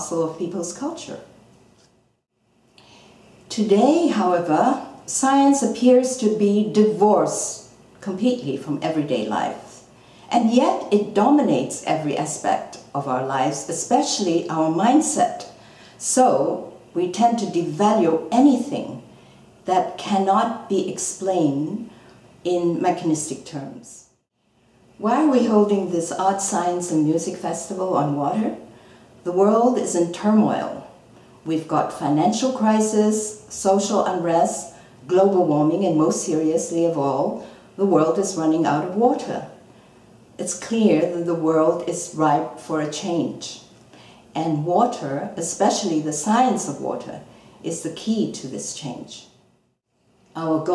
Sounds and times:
Speech: 0:00.0 - 0:01.3, 0:03.5 - 0:19.1, 0:19.7 - 0:24.1, 0:25.0 - 0:39.6, 0:40.4 - 0:43.7, 0:44.3 - 0:49.4, 0:50.3 - 0:50.7.

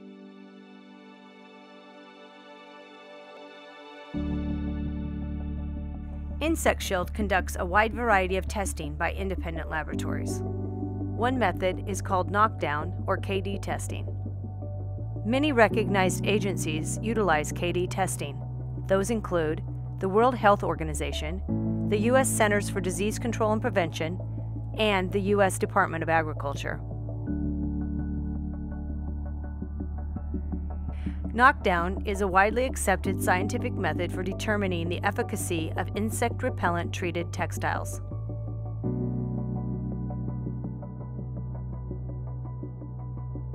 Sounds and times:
Music: 0:00.0 - 0:43.5
Speech: 0:06.4 - 0:10.4, 0:11.2 - 0:14.0, 0:15.3 - 0:24.2, 0:24.8 - 0:26.8, 0:31.3 - 0:38.0.

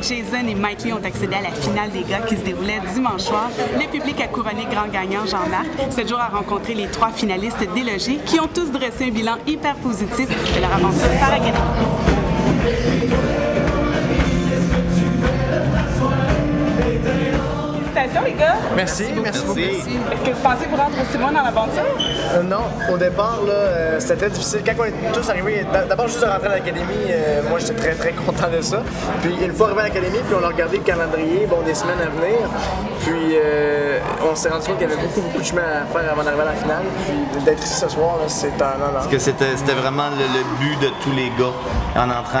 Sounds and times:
Music: 0:00.0 - 0:42.4.

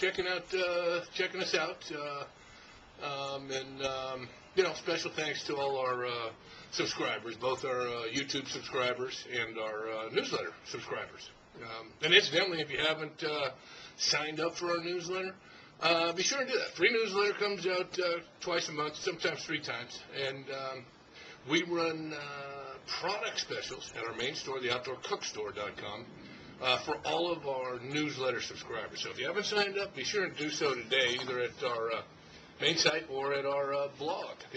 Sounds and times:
Speech: 0:00.0 - 0:02.4, 0:03.0 - 0:34.5.

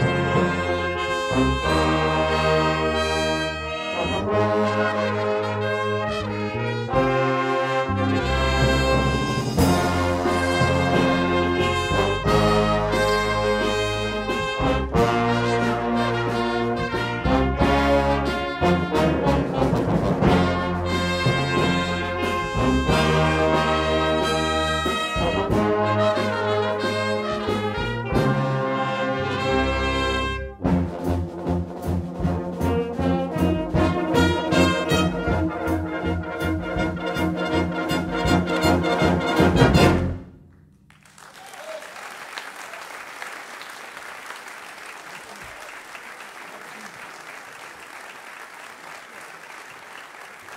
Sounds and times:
Trombone: 0:00.0 - 0:40.6
Trumpet: 0:00.0 - 0:40.8
Orchestra: 0:00.0 - 0:50.5.

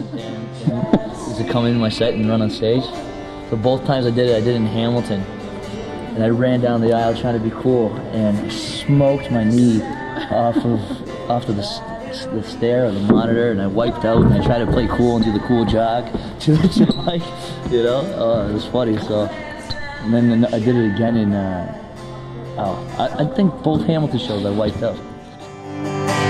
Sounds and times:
Speech: 0:00.0 - 0:05.3, 0:06.2 - 0:19.4, 0:20.0 - 0:21.8, 0:22.6 - 0:25.0
Inside, large room or hall: 0:00.0 - 0:26.3
Music: 0:00.0 - 0:26.3
Singing: 0:00.0 - 0:26.3.

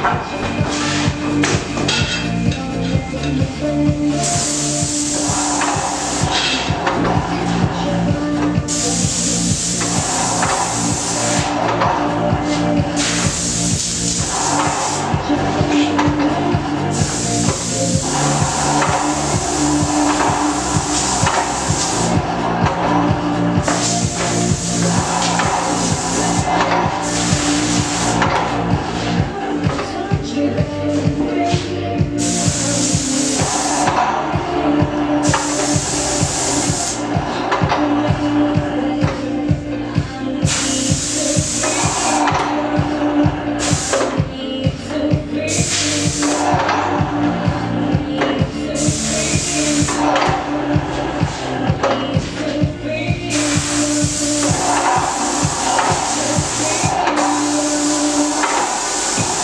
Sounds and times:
Music: 0:00.0 - 0:59.4
Spray: 0:04.1 - 0:07.6, 0:08.4 - 0:29.8, 0:30.9 - 0:34.0, 0:35.2 - 0:37.8, 0:40.4 - 0:42.9, 0:43.6 - 0:44.3, 0:45.5 - 0:46.8, 0:48.7 - 0:50.5, 0:53.3 - 0:59.4.

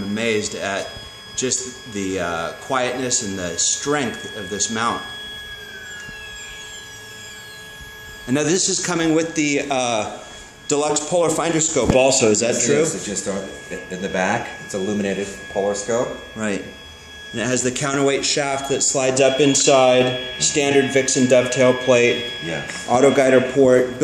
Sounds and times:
Speech: 0:00.0 - 0:05.1, 0:08.3 - 0:16.8, 0:17.4 - 0:24.0.

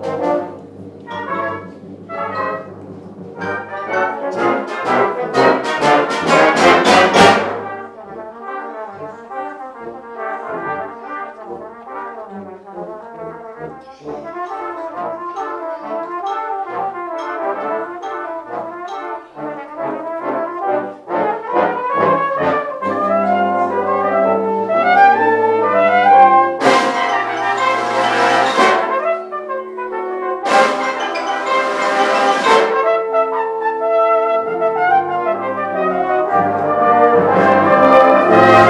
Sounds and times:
Orchestra: 0:00.0 - 0:38.7
Trumpet: 0:00.0 - 0:38.7.

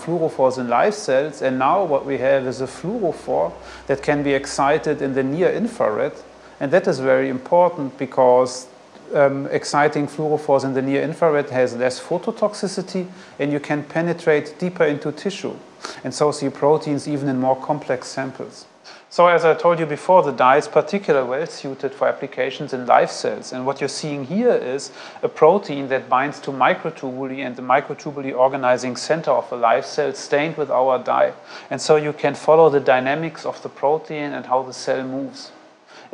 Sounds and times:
Inside, small room: 0:00.0 - 0:36.1
Speech: 0:00.0 - 0:36.1.

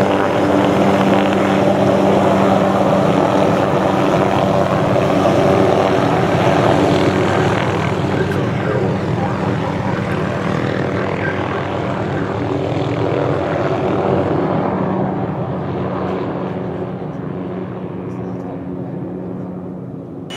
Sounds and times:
Speech: 0:08.1 - 0:12.3, 0:18.1 - 0:19.6.

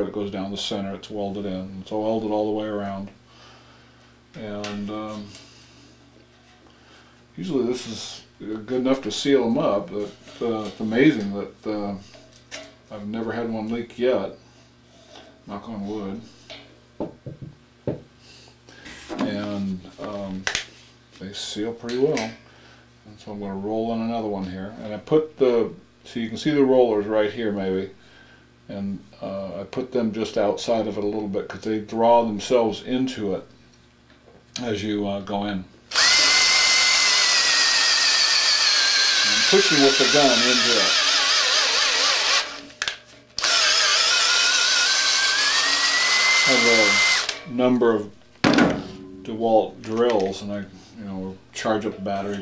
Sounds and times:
Speech: 0:00.0 - 0:03.2, 0:04.4 - 0:05.4, 0:07.4 - 0:12.1, 0:12.9 - 0:14.4, 0:15.5 - 0:16.3, 0:19.1 - 0:20.5, 0:21.2 - 0:22.4, 0:23.1 - 0:28.0, 0:28.7 - 0:33.5, 0:34.6 - 0:35.7, 0:39.2 - 0:41.0, 0:46.4 - 0:48.2, 0:49.2 - 0:52.4.

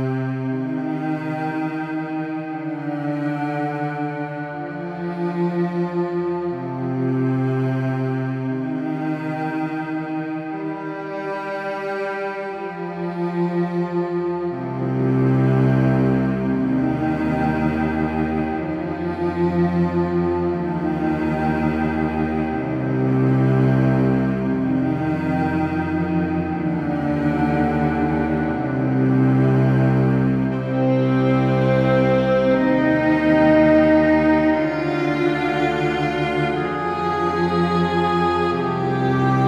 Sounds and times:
Cello: 0:00.0 - 0:39.4
Tender music: 0:12.3 - 0:39.4.

